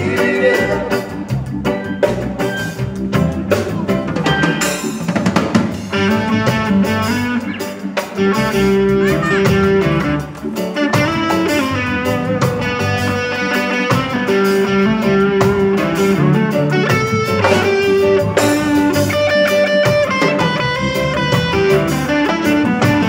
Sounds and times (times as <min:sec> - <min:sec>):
Drum kit: 0:00.0 - 0:23.0.